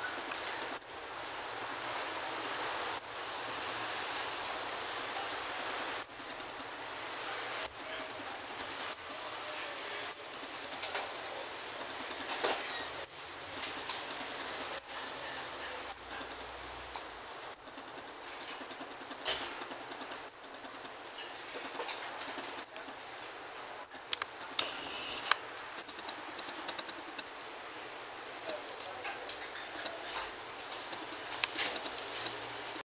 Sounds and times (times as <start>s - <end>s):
Speech: 7.2s - 11.6s, 28.3s - 30.3s.